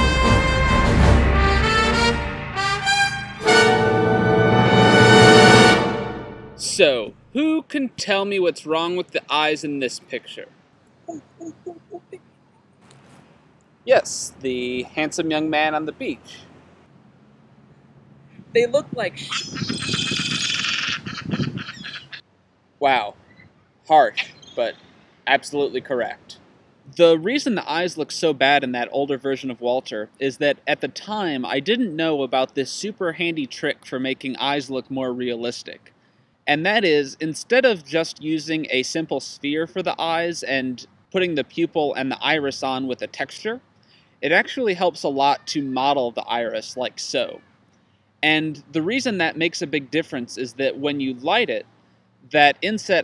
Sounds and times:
Speech: 0:06.6 - 0:10.5, 0:11.1 - 0:12.2, 0:13.9 - 0:16.4, 0:18.6 - 0:22.2, 0:22.8 - 0:23.1, 0:23.9 - 0:35.9, 0:36.5 - 0:43.6, 0:44.2 - 0:47.4, 0:48.2 - 0:51.6, 0:52.3 - 0:53.0.

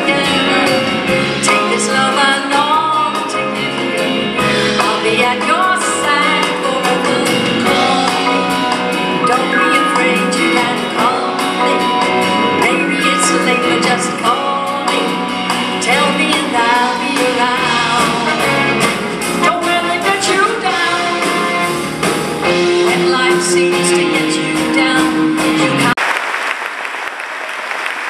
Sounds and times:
Female singing: 0:00.0 - 0:04.1, 0:04.8 - 0:18.7, 0:19.4 - 0:21.5, 0:22.8 - 0:26.0
Pop music: 0:00.0 - 0:26.0.

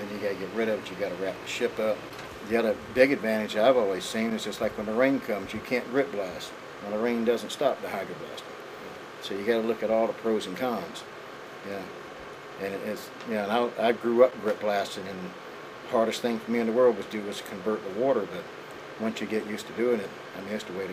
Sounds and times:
Speech: 0:00.0 - 0:08.5, 0:09.2 - 0:12.0, 0:12.6 - 0:20.9.

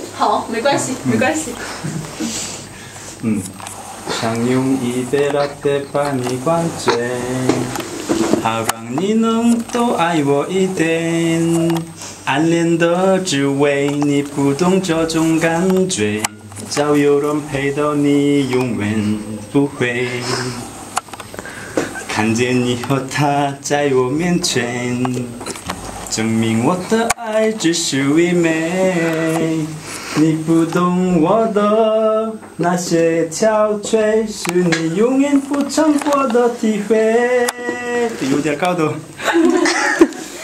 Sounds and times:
Male singing: 0:04.1 - 0:20.7, 0:22.1 - 0:39.6.

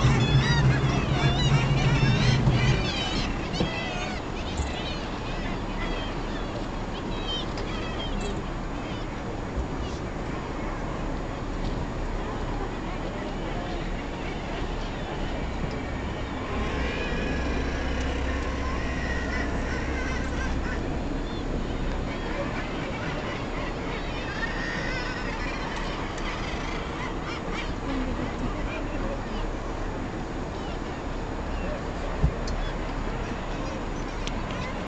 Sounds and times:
Speech: 0:03.8 - 0:16.4, 0:27.3 - 0:34.8.

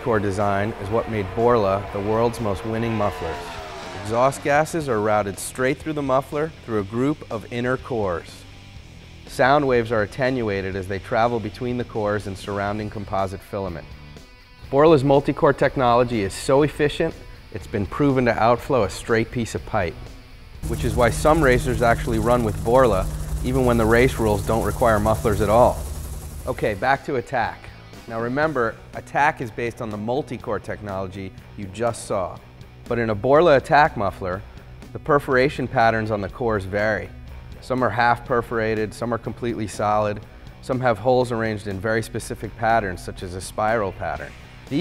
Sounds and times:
Speech: 0:00.0 - 0:08.4, 0:09.3 - 0:13.8, 0:14.7 - 0:19.9, 0:26.5 - 0:44.8
Music: 0:00.0 - 0:44.8.

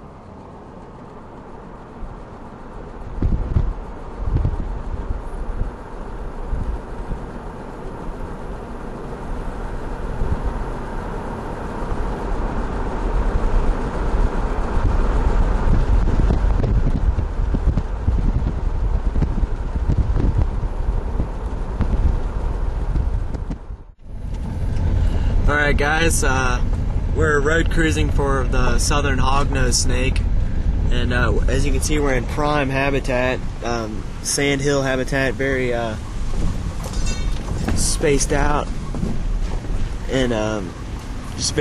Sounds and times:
Outside, rural or natural: 0:00.0 - 0:41.6
Speech: 0:25.5 - 0:26.6, 0:27.2 - 0:30.2, 0:30.9 - 0:36.0, 0:37.6 - 0:38.7, 0:40.1 - 0:40.8, 0:41.4 - 0:41.6.

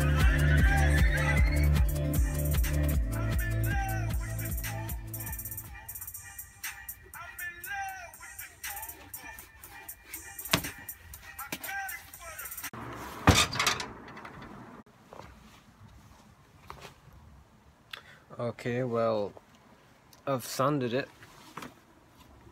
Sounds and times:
Music: 0:00.0 - 0:12.7.

